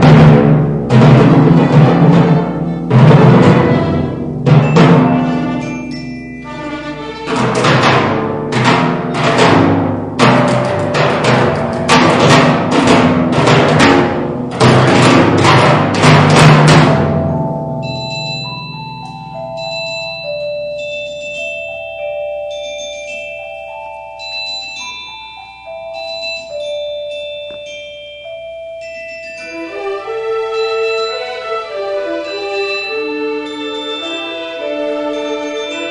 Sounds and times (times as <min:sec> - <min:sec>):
Glockenspiel: 0:00.0 - 0:35.9
Marimba, xylophone: 0:00.0 - 0:35.9.